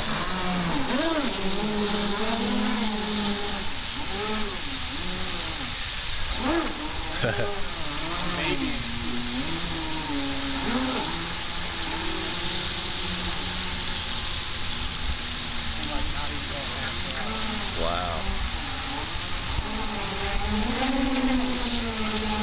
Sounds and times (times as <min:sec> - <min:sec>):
Motorboat, speedboat: 0:00.0 - 0:22.4
Speech: 0:15.8 - 0:18.3.